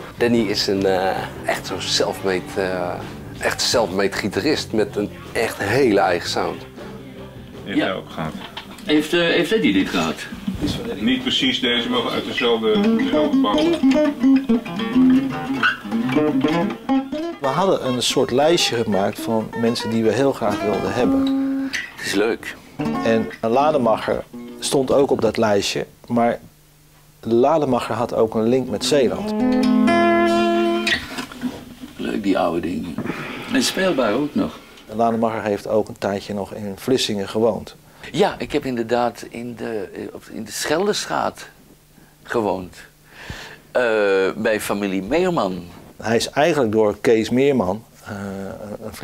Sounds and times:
Speech: 0.0 - 6.6, 7.7 - 13.8, 17.4 - 21.3, 22.0 - 26.5, 27.2 - 29.3, 32.0 - 41.6, 42.2 - 42.9, 43.7 - 49.0
Acoustic guitar: 0.0 - 25.2, 28.6 - 35.2.

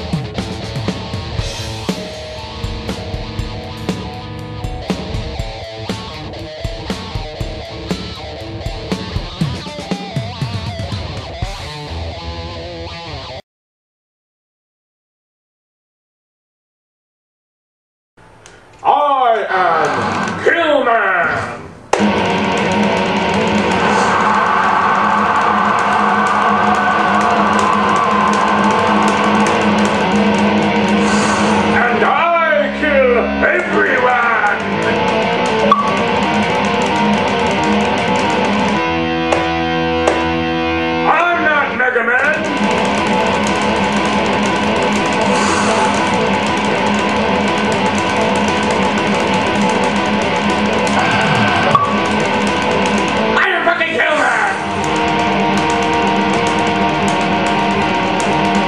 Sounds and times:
Electric guitar: 0.0 - 13.4, 22.0 - 58.6
Speech: 18.8 - 21.6, 31.8 - 34.6, 41.0 - 42.4, 53.4 - 54.6.

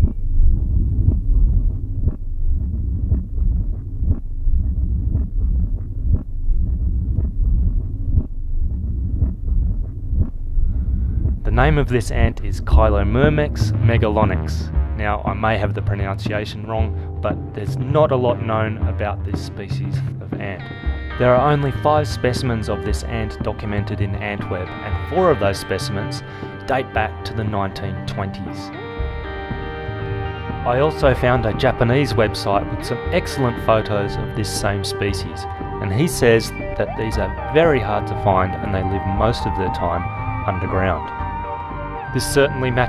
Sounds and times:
Music: 0.0 - 42.8
Speech: 11.5 - 20.6, 21.2 - 28.7, 30.7 - 41.1, 42.2 - 42.8.

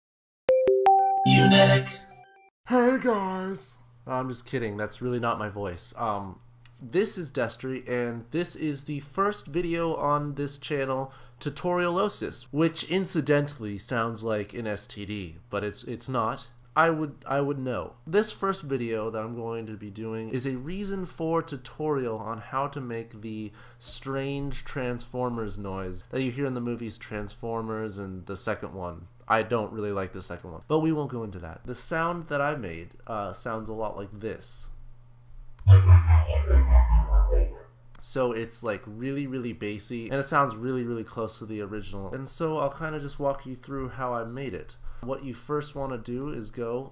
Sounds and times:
Music: 0.5 - 2.4, 35.7 - 37.6
Speech: 2.7 - 34.8, 36.3 - 46.9.

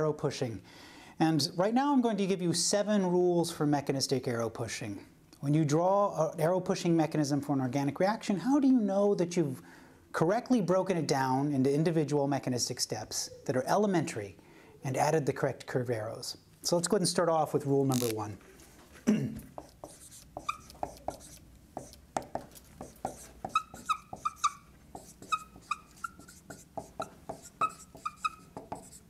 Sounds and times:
Speech: 0.0 - 0.6, 1.2 - 9.6, 10.2 - 18.4.

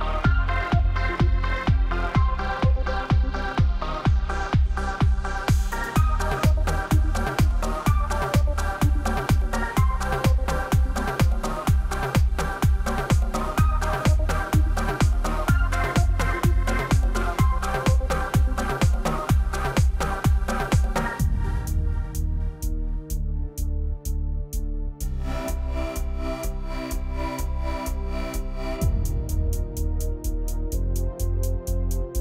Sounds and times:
Music: 0.0 - 32.2.

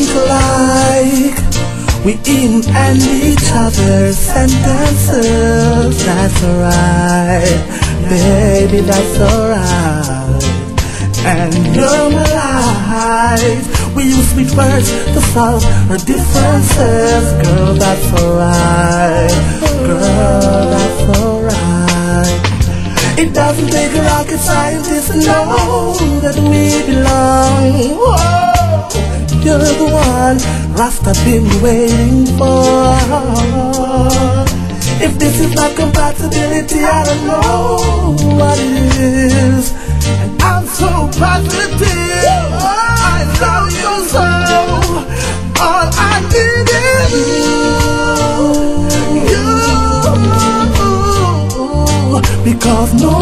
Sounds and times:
Music: 0.0 - 53.2.

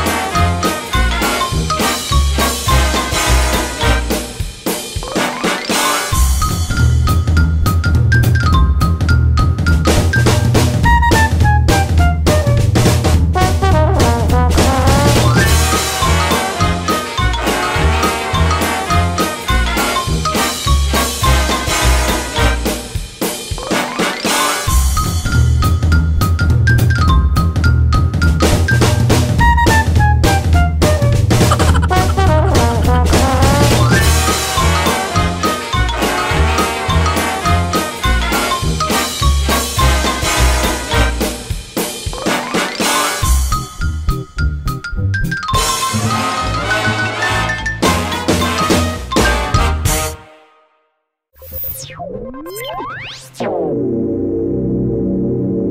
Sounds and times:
Music: 0.0 - 51.2.

